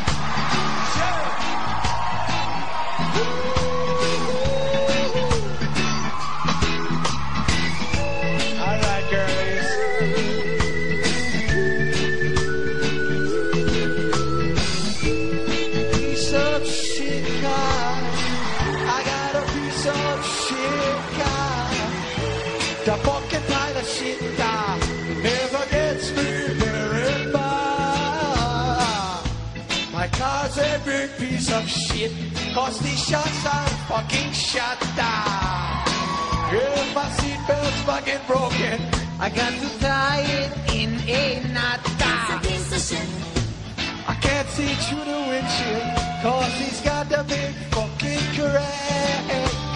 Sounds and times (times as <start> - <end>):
Music: 0.0 - 49.7.